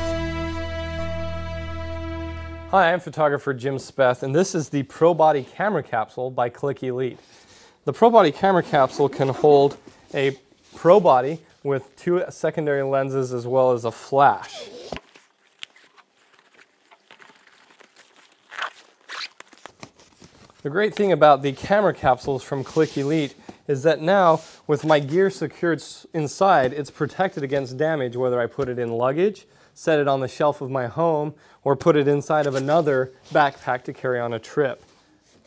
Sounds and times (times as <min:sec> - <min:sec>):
Speech: 0:02.7 - 0:07.2, 0:07.8 - 0:14.7, 0:20.6 - 0:34.8.